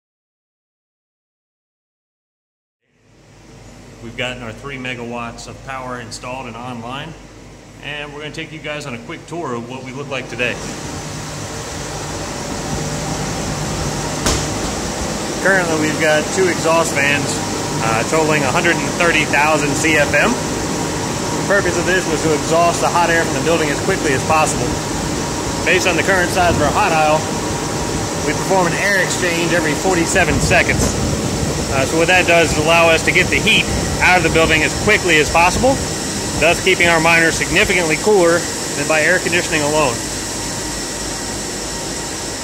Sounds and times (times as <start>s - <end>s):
Speech: 4.0s - 7.2s, 7.8s - 10.7s, 15.4s - 20.4s, 21.5s - 24.8s, 25.6s - 27.3s, 28.2s - 31.0s, 31.7s - 35.8s, 36.4s - 40.0s.